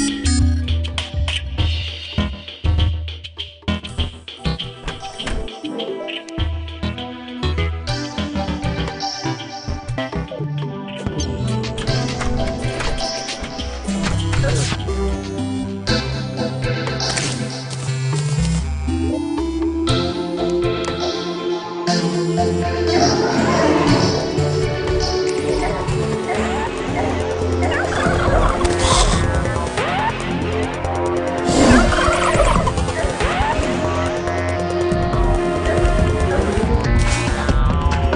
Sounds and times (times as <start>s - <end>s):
Music: 0.0s - 38.1s.